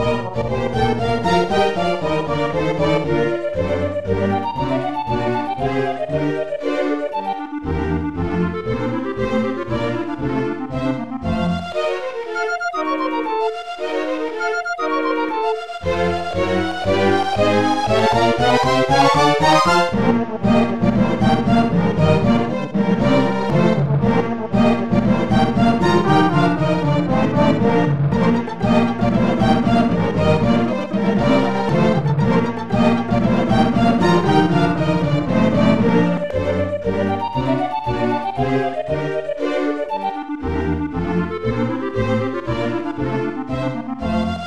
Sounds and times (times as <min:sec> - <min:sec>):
Violin, fiddle: 0:00.0 - 0:44.4.